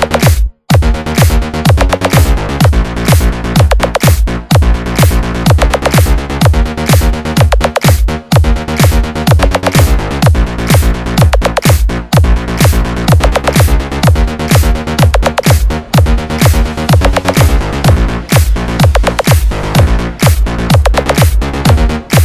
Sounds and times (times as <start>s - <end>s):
Music: 0.0s - 22.2s.